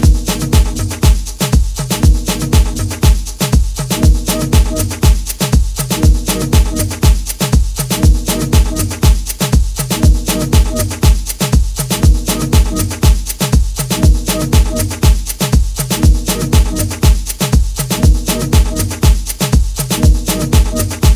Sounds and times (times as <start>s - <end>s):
Disco: 0.0s - 21.1s.